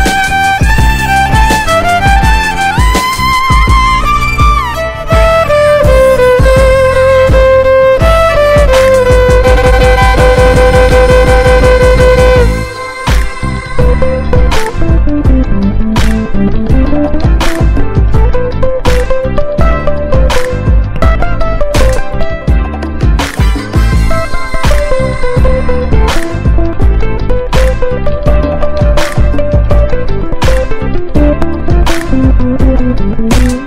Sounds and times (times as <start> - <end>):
Violin, fiddle: 0.0 - 15.1.